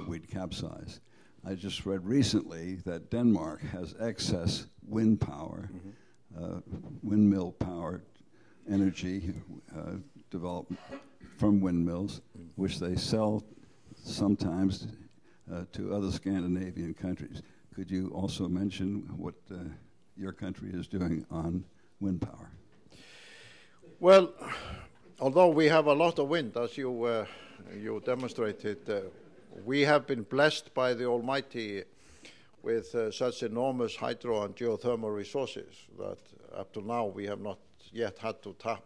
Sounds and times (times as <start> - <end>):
Speech: 0.0 - 8.1, 8.7 - 22.6, 23.9 - 31.9, 32.6 - 38.8.